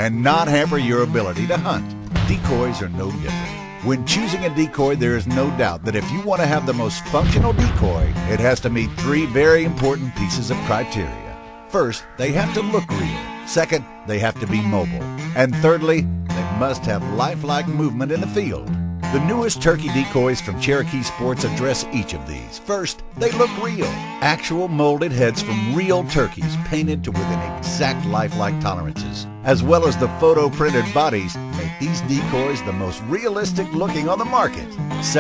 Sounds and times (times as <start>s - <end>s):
Music: 0.0s - 35.2s
Speech: 0.0s - 35.2s.